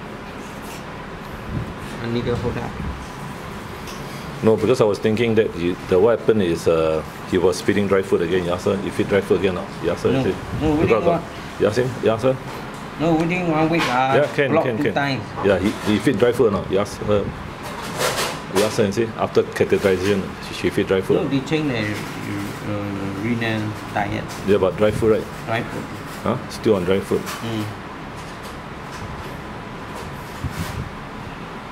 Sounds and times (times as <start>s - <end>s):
Speech: 2.0s - 2.9s, 4.4s - 12.4s, 13.0s - 17.4s, 18.6s - 27.8s.